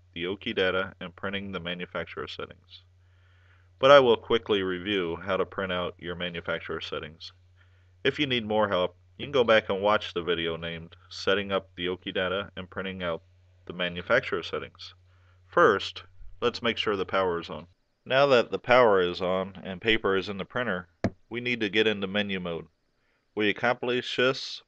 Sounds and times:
Speech: 0.2s - 2.8s, 3.8s - 7.3s, 8.1s - 15.0s, 15.6s - 22.7s, 23.4s - 24.6s.

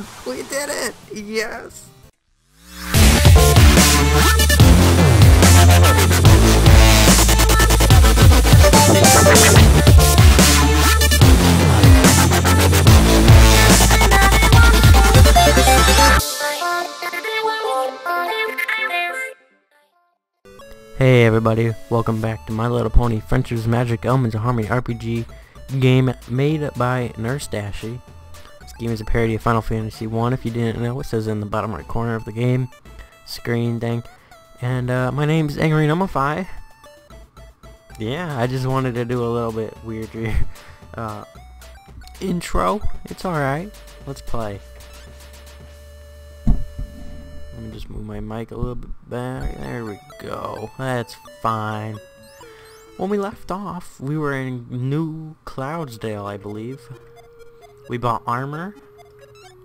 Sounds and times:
Dubstep: 2.7s - 17.2s.

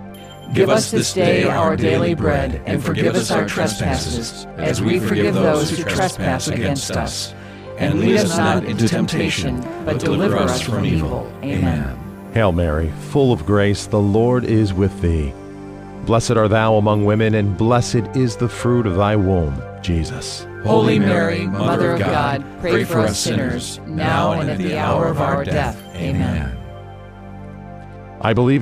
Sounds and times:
Music: 0.0s - 28.6s
Speech: 0.5s - 15.4s, 16.0s - 26.7s, 28.2s - 28.6s.

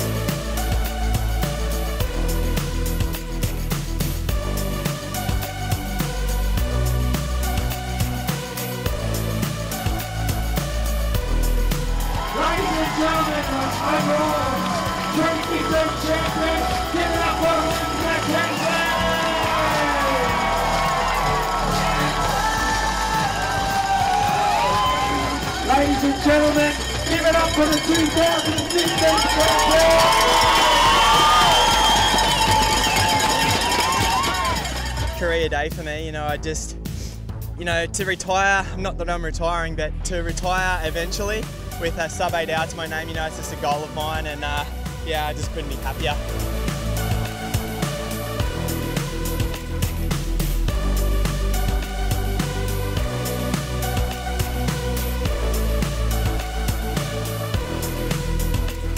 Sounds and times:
Music: 0.0s - 58.9s.

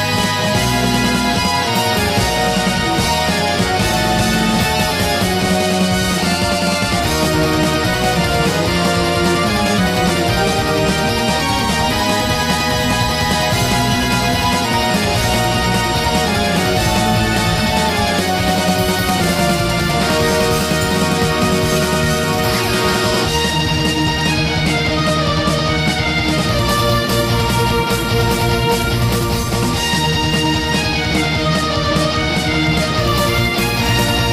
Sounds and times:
Music: 0.0s - 34.3s.

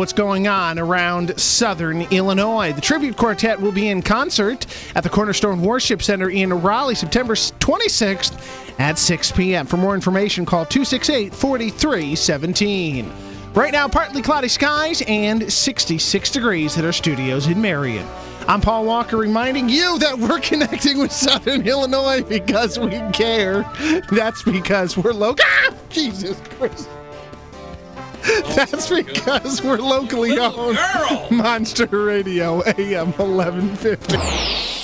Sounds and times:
Speech: 0.0s - 26.9s, 28.3s - 34.1s
Music: 0.0s - 34.8s.

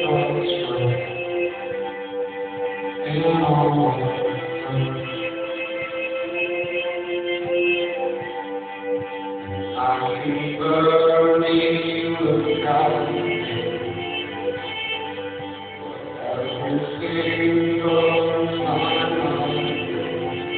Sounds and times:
Music: 0.0s - 20.5s.

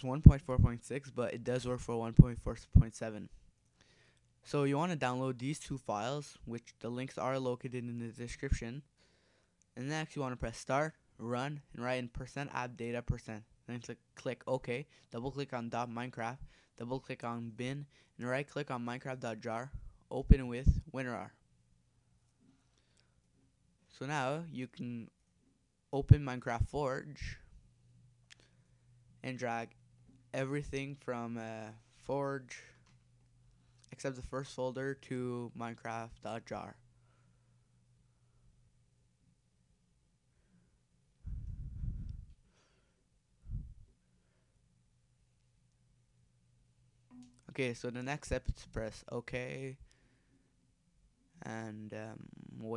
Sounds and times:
Speech: 0.0s - 3.4s, 4.4s - 8.9s, 9.8s - 21.4s, 23.9s - 25.2s, 25.9s - 27.5s, 29.2s - 32.8s, 33.9s - 36.8s, 47.2s - 49.8s, 51.4s - 52.7s.

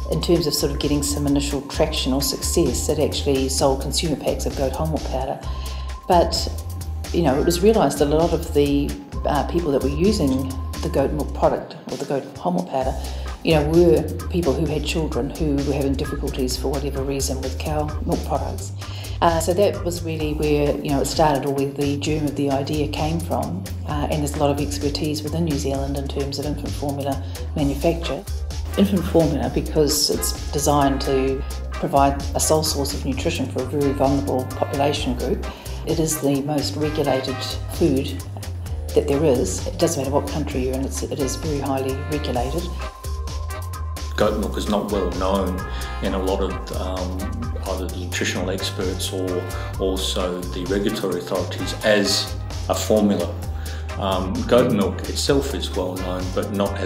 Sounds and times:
Music: 0.0s - 56.8s
Speech: 0.1s - 5.4s, 6.1s - 28.2s, 28.8s - 38.2s, 39.0s - 42.7s, 44.2s - 53.4s, 54.0s - 56.8s.

